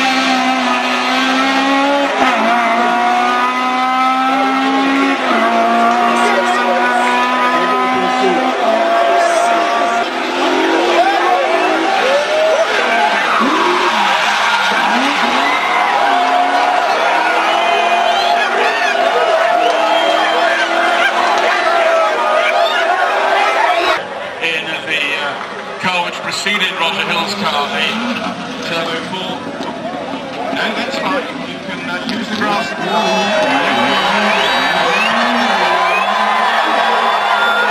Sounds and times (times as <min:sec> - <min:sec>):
Speech: 0:04.3 - 0:10.0, 0:23.8 - 0:29.4, 0:30.5 - 0:33.8
Shout: 0:04.8 - 0:24.0, 0:32.7 - 0:37.7.